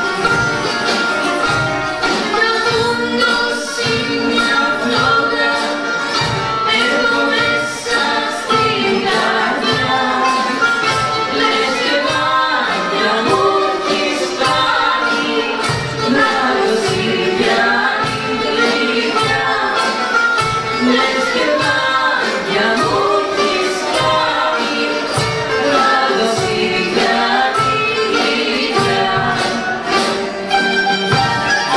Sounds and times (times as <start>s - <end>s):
Traditional music: 0.0s - 31.7s.